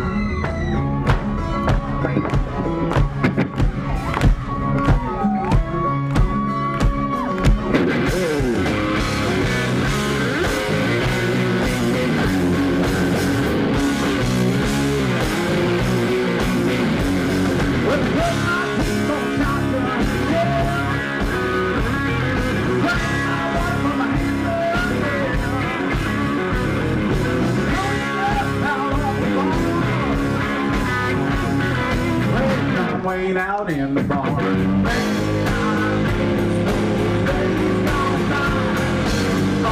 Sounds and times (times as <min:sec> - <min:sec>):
Country: 0:00.0 - 0:39.7.